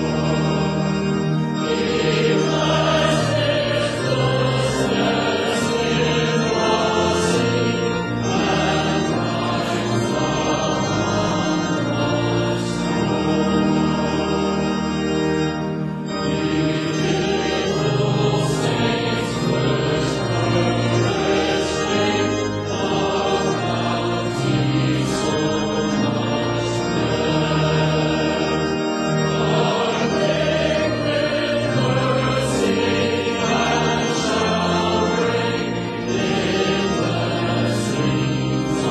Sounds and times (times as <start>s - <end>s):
Choir: 0.0s - 14.8s, 16.2s - 38.9s.